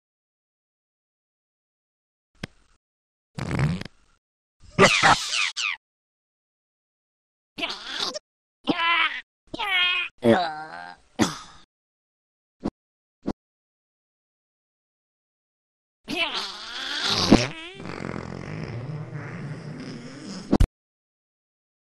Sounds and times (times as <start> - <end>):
Fart: 3.4 - 3.9, 16.2 - 20.7.